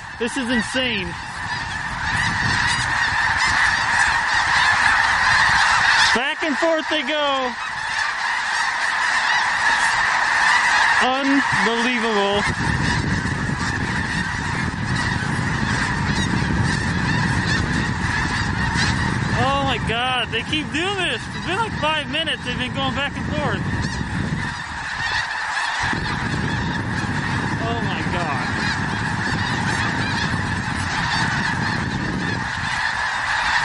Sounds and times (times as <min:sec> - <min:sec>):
Honk: 0:00.0 - 0:33.6.